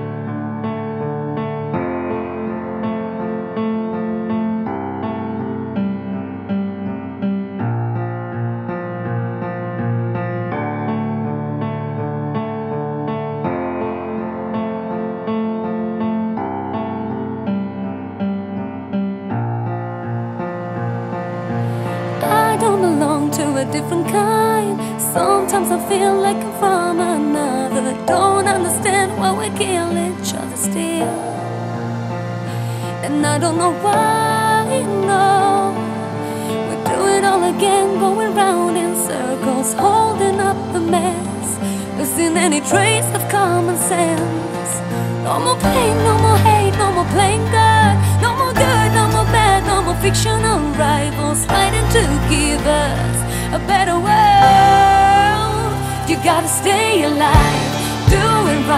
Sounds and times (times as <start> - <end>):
Music: 0.0 - 58.7.